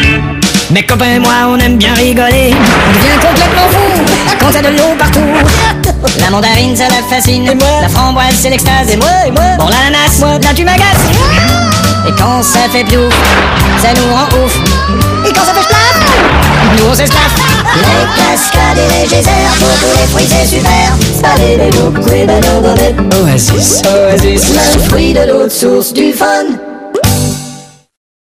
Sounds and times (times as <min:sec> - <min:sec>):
Music: 0:00.0 - 0:28.0
Synthetic singing: 0:00.7 - 0:16.2, 0:16.8 - 0:26.6
Child singing: 0:10.8 - 0:13.1, 0:17.2 - 0:23.0, 0:23.6 - 0:26.6.